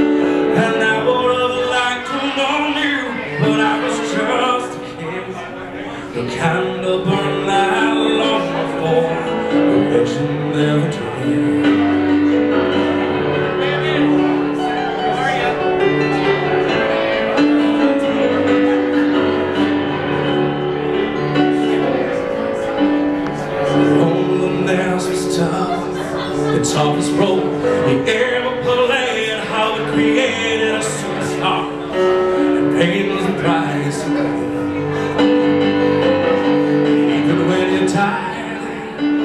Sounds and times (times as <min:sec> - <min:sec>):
Music: 0:00.0 - 0:39.2
Speech: 0:00.6 - 0:12.1, 0:12.8 - 0:16.8.